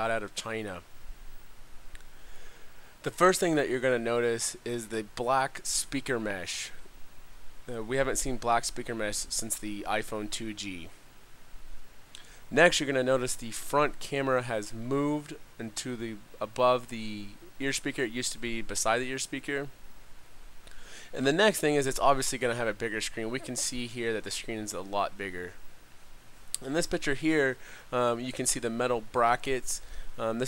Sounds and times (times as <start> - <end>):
Speech: 0.0 - 0.9, 3.0 - 6.8, 7.7 - 11.0, 12.5 - 19.8, 21.1 - 25.6, 26.6 - 30.4.